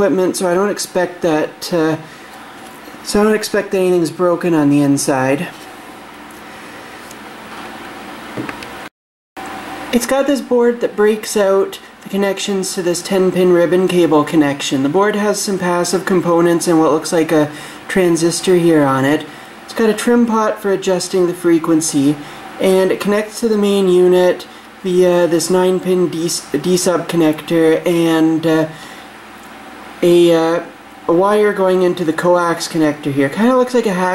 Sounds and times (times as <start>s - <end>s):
Speech: 0.0s - 2.1s, 3.0s - 5.6s, 9.9s - 28.8s, 30.0s - 34.1s.